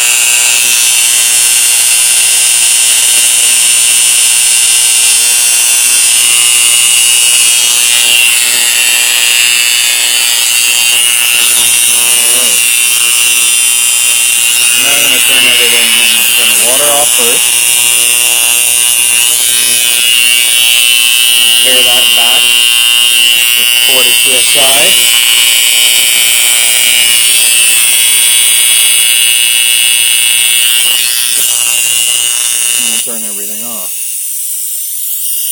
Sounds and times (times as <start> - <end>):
Inside, small room: 0.0 - 35.5
Speech: 14.8 - 17.4, 21.6 - 22.6, 23.6 - 25.0, 32.8 - 33.9.